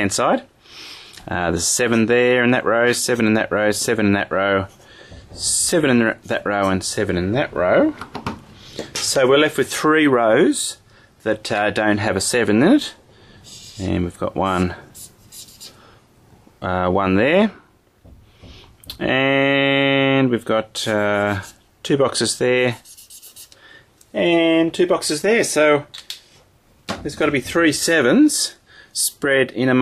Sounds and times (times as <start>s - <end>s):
Speech: 0.0s - 0.5s, 1.3s - 4.7s, 5.4s - 8.0s, 9.0s - 13.0s, 13.8s - 14.8s, 16.6s - 17.6s, 18.9s - 22.8s, 24.1s - 25.9s, 26.9s - 29.8s
Inside, small room: 0.0s - 29.8s.